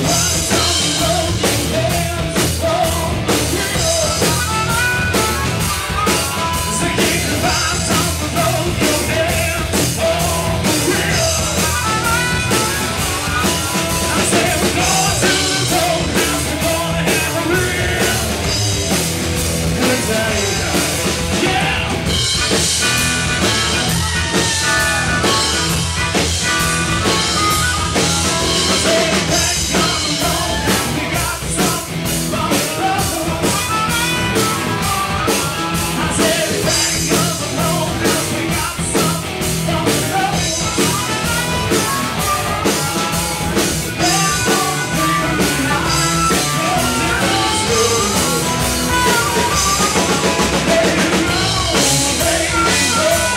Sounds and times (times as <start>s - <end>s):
Harmonica: 2.7s - 19.0s, 19.8s - 31.1s, 32.5s - 39.1s, 39.8s - 53.3s.